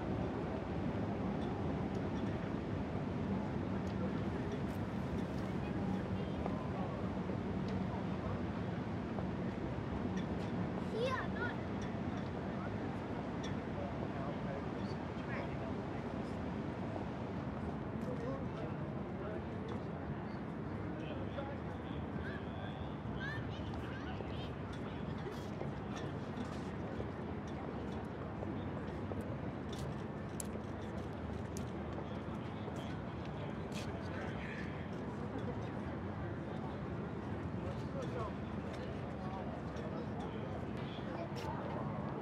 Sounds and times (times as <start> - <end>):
Speech: 3.2 - 9.4, 10.8 - 30.6, 31.6 - 42.2.